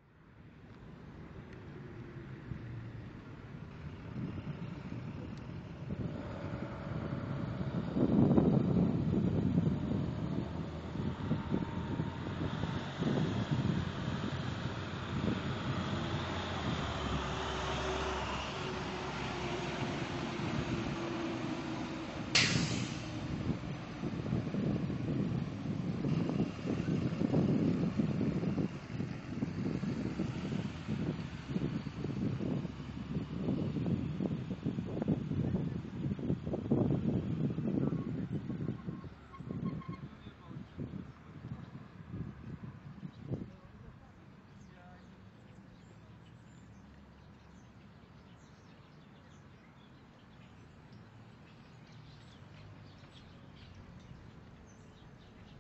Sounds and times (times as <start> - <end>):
Outside, urban or manmade: 0.0 - 55.6.